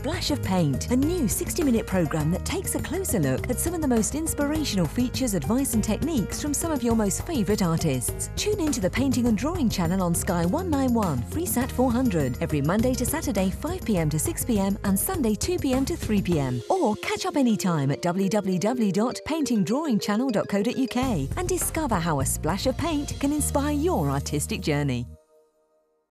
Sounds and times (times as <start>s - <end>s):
Speech: 0.0s - 25.2s
Music: 0.0s - 26.1s.